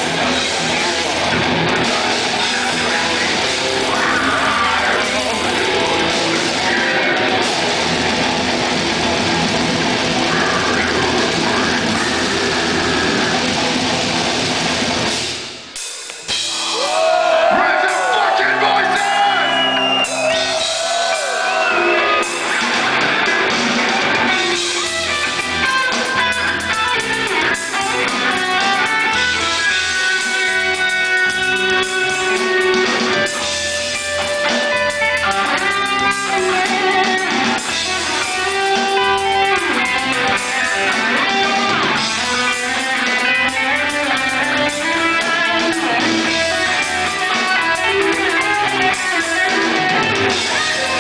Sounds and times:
Music: 0.0 - 51.0
Speech: 3.9 - 6.1, 17.5 - 19.5, 50.4 - 51.0.

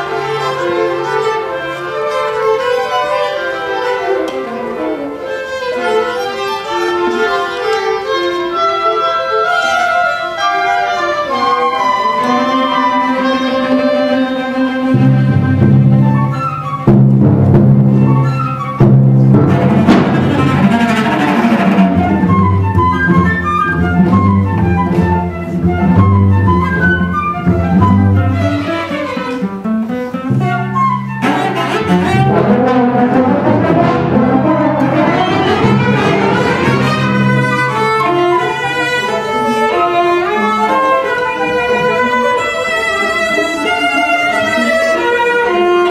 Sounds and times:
Violin, fiddle: 0.0 - 16.9, 19.5 - 45.9
Cello: 0.0 - 45.9
Orchestra: 0.0 - 45.9.

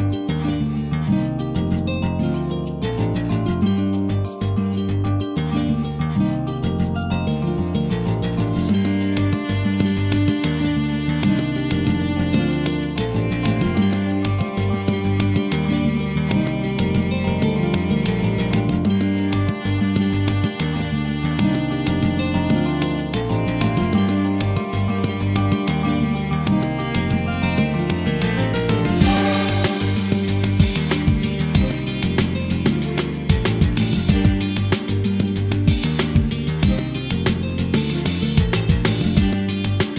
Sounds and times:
Music: 0.0 - 39.9.

